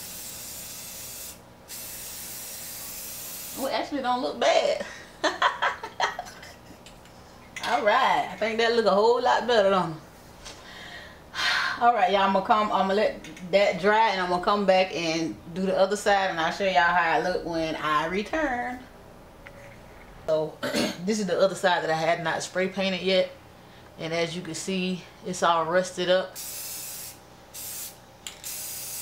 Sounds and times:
Speech: 3.6 - 4.8, 7.6 - 10.0, 11.8 - 18.9, 24.0 - 26.4.

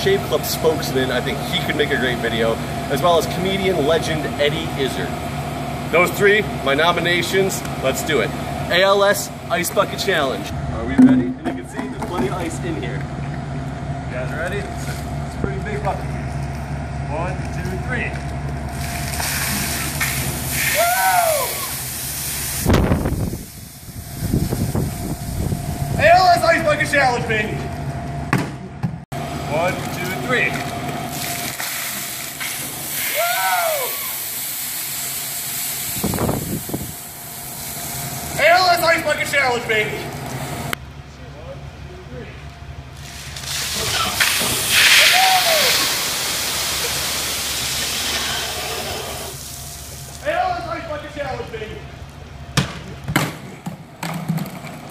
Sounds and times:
Speech: 0.0 - 5.2, 5.9 - 13.0, 14.1 - 16.2, 17.1 - 18.2, 26.0 - 27.7, 29.5 - 30.6, 38.4 - 40.1, 41.1 - 42.4, 50.2 - 51.9.

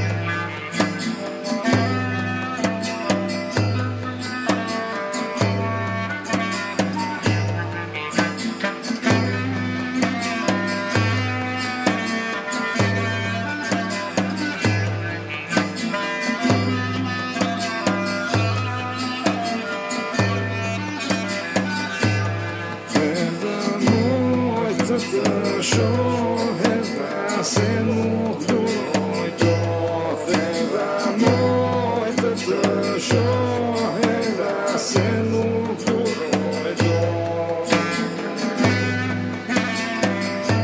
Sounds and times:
Music: 0.0 - 40.6.

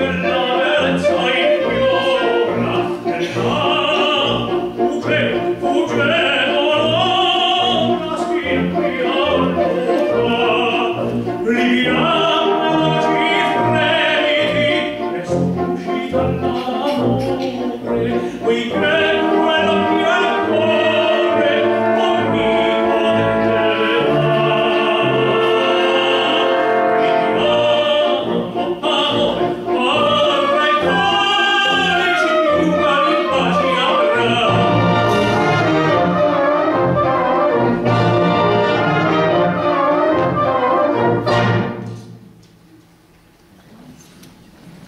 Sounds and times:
Opera: 0.0 - 44.8
Orchestra: 0.0 - 44.8.

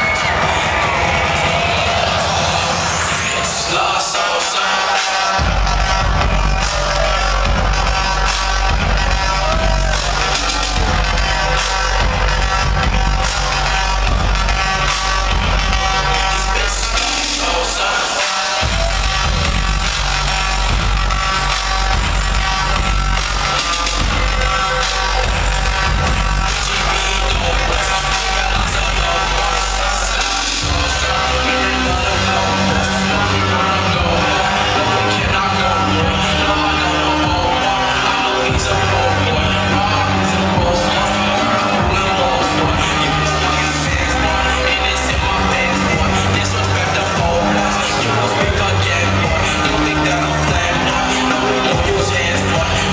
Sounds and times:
Techno: 0.0 - 52.9.

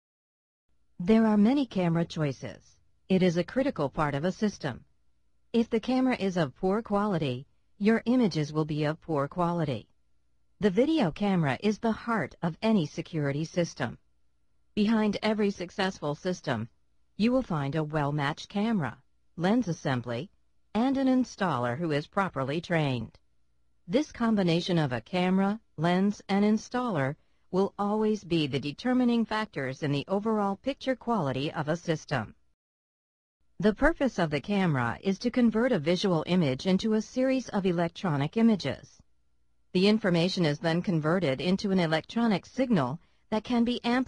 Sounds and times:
Speech: 1.0 - 4.8, 5.6 - 9.9, 10.6 - 14.0, 14.8 - 23.2, 23.9 - 32.4, 33.6 - 39.0, 39.8 - 44.0.

